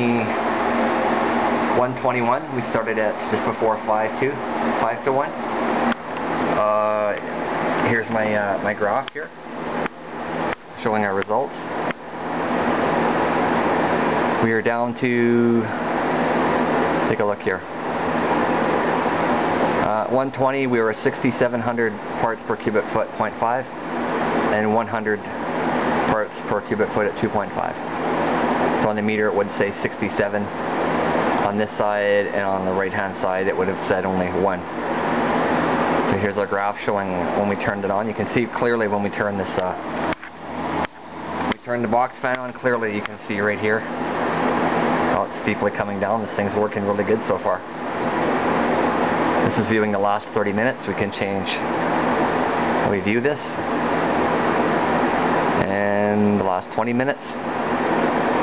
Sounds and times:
Speech: 0.0s - 0.4s, 1.7s - 5.4s, 6.6s - 9.3s, 10.8s - 11.7s, 14.4s - 15.7s, 17.0s - 17.7s, 19.8s - 23.7s, 24.5s - 25.3s, 26.0s - 27.8s, 28.8s - 30.5s, 31.4s - 34.7s, 36.1s - 39.8s, 41.5s - 43.9s, 45.1s - 47.6s, 49.4s - 51.7s, 52.8s - 53.7s, 55.6s - 57.4s.

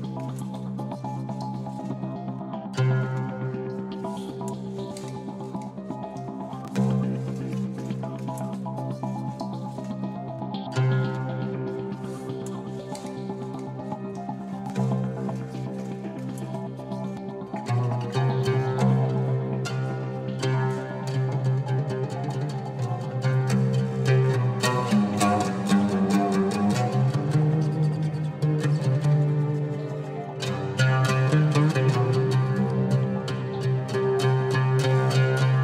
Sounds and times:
Music: 0.0s - 35.6s.

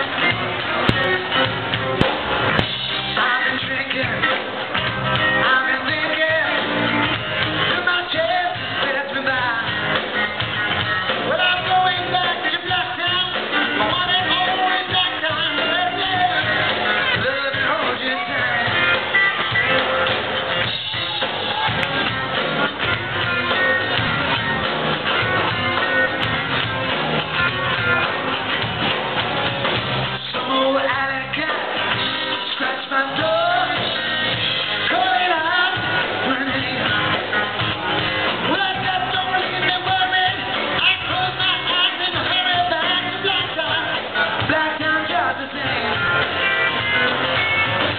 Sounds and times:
Inside, large room or hall: 0.0s - 47.9s
Music: 0.0s - 47.9s
Singing: 3.0s - 10.3s, 11.1s - 19.8s, 30.2s - 37.8s, 38.4s - 47.0s.

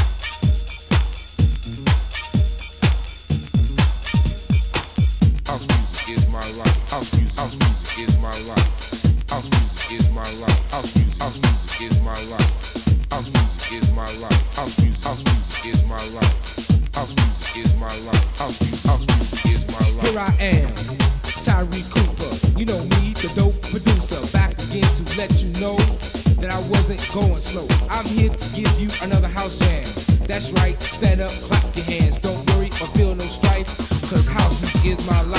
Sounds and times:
House music: 0.0s - 35.3s.

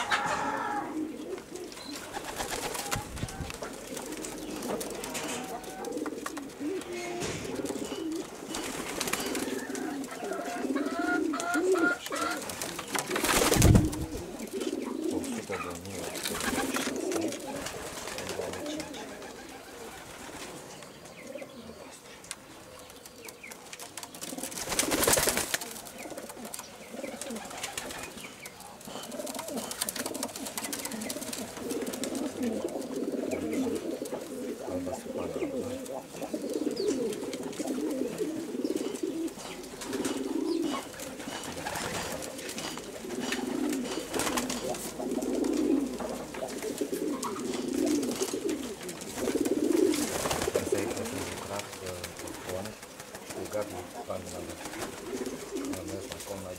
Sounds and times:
Pigeon, dove: 0.0s - 56.5s
Speech: 15.3s - 16.3s, 18.1s - 19.2s, 34.6s - 36.0s, 50.5s - 54.8s, 55.6s - 56.5s.

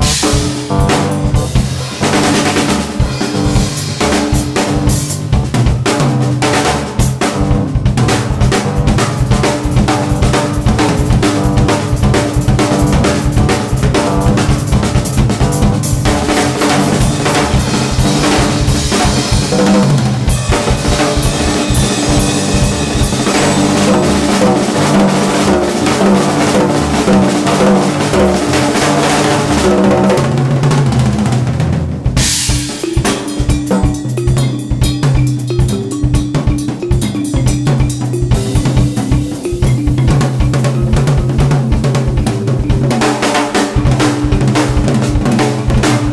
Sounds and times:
Bass drum: 0.0s - 31.3s, 31.9s - 46.1s
Drum kit: 0.0s - 46.1s.

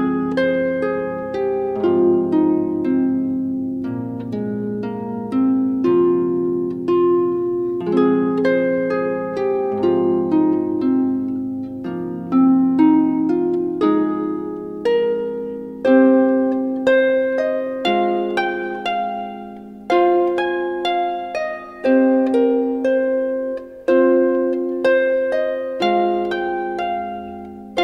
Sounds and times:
Keyboard (musical): 0.0s - 27.8s.

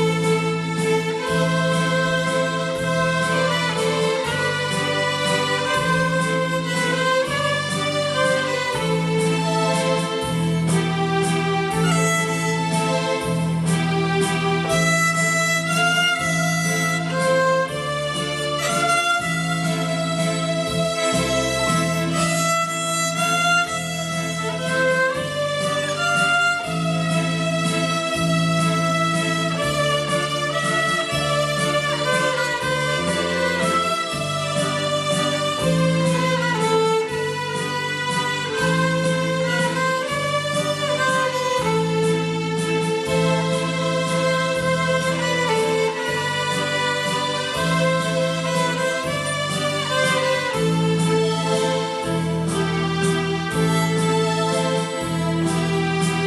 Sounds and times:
Violin, fiddle: 0.0s - 56.2s.

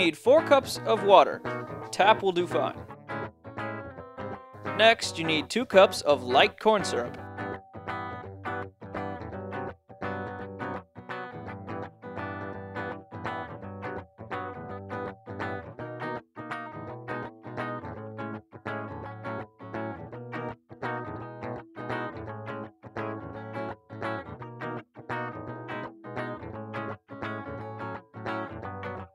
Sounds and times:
Speech: 0.0s - 1.4s, 2.0s - 2.8s, 4.8s - 7.2s
Music: 0.0s - 29.1s.

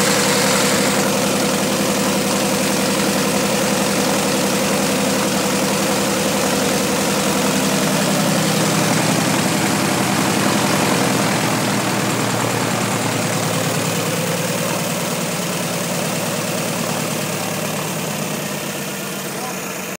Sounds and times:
Aircraft: 0.0s - 18.8s
Heavy engine (low frequency): 0.0s - 20.0s.

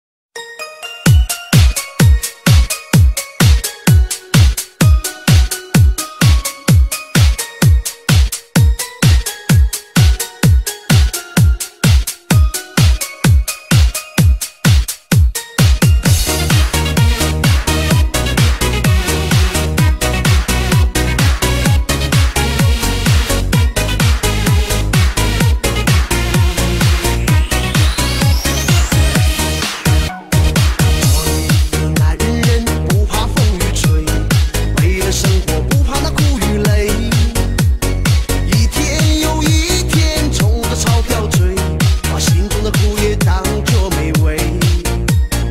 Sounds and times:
Music: 0.4s - 45.5s.

